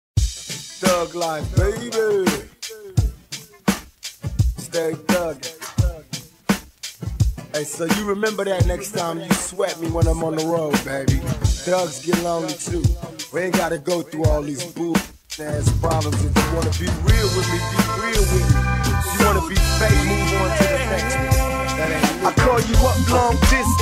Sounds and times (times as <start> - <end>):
Rapping: 0.8 - 3.6, 4.6 - 6.3, 7.5 - 23.8.